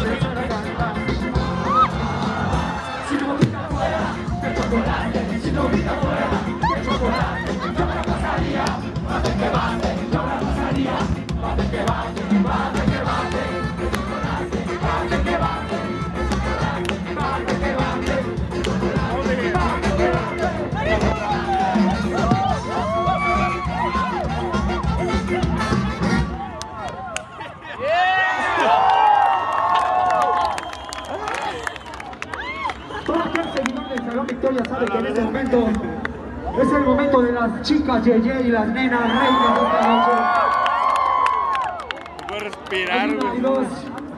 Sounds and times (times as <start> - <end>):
Music: 0.0 - 26.6.